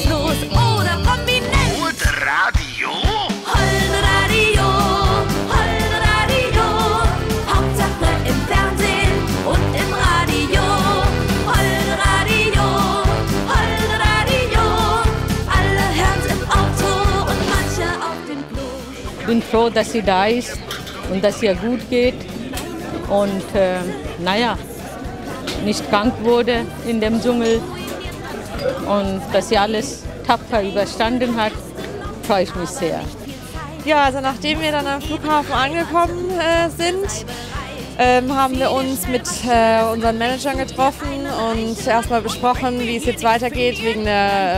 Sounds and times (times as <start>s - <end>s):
Music: 0.0s - 44.5s.